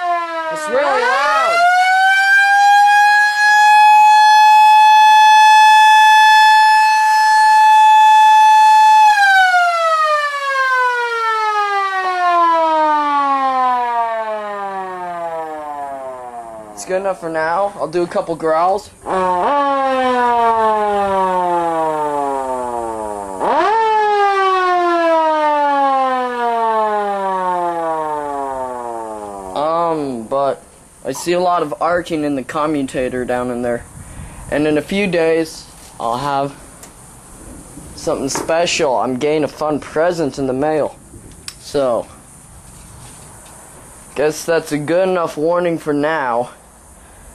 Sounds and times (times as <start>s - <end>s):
Alarm: 0.0s - 16.8s, 19.0s - 29.6s.